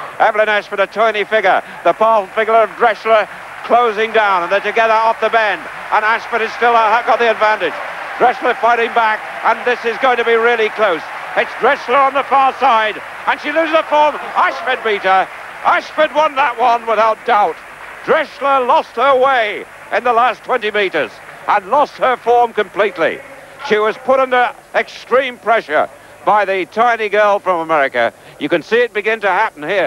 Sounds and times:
Speech: 0:00.2 - 0:29.8.

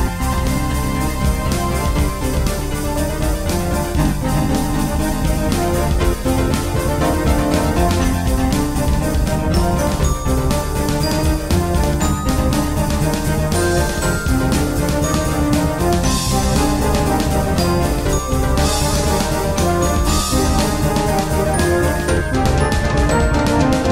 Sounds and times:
Electronica: 0:00.0 - 0:23.9.

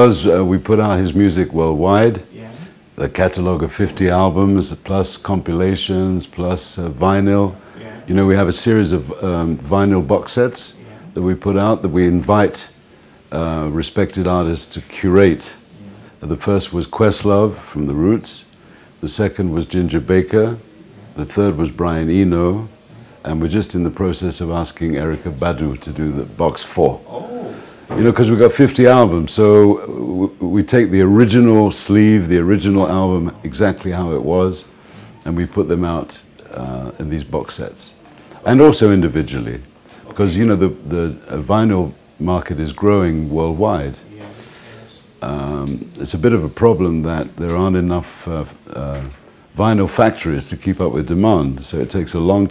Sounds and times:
Speech: 0:00.0 - 0:52.5.

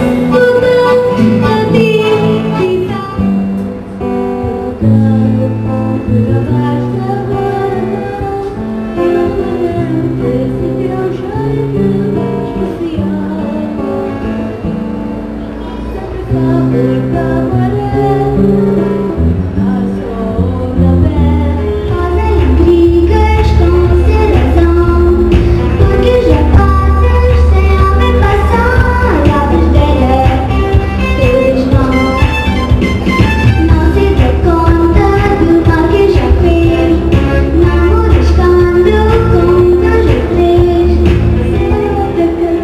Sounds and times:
Music: 0:00.0 - 0:42.6
Female singing: 0:00.3 - 0:03.4, 0:04.5 - 0:14.3, 0:15.6 - 0:32.4, 0:33.5 - 0:42.6.

